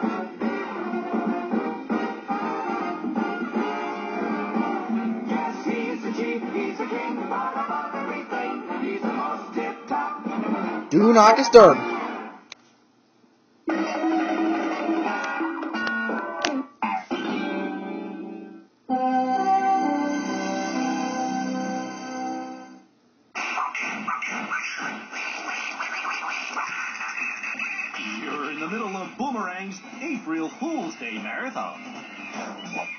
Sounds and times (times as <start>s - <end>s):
Music: 0.0s - 12.5s, 13.7s - 22.9s.